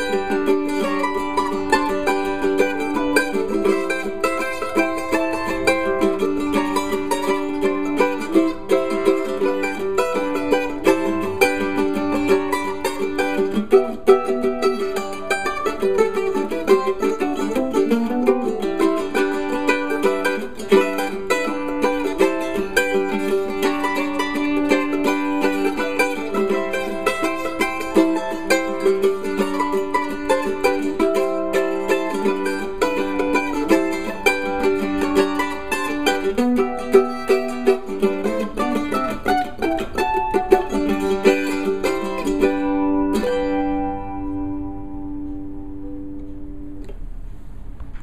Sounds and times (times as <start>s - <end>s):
Mandolin: 0.0s - 48.0s.